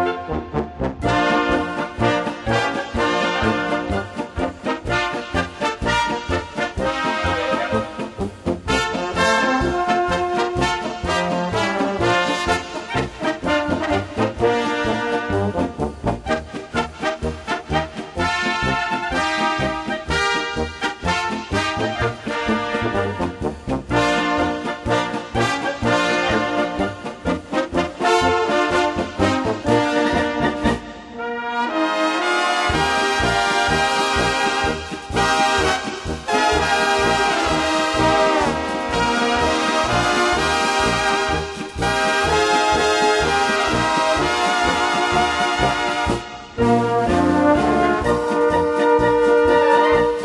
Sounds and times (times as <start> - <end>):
Music: 0.0 - 50.2.